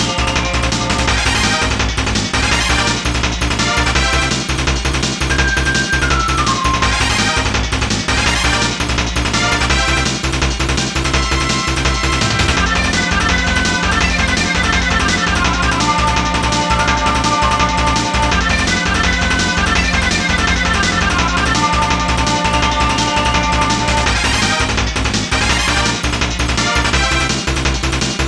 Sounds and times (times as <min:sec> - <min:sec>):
Music: 0:00.0 - 0:28.2.